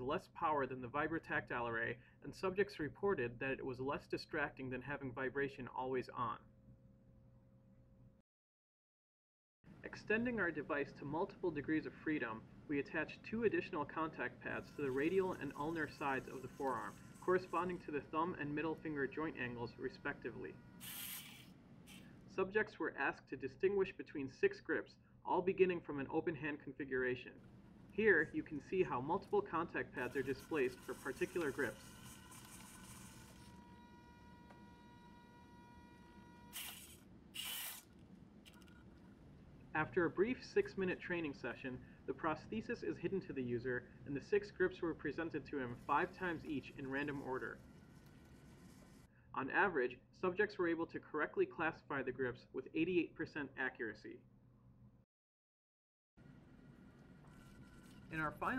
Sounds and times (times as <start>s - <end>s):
Speech: 0.0s - 6.5s, 9.8s - 20.6s, 22.3s - 27.4s, 28.0s - 31.9s, 39.7s - 47.6s, 49.3s - 54.2s, 58.1s - 58.5s.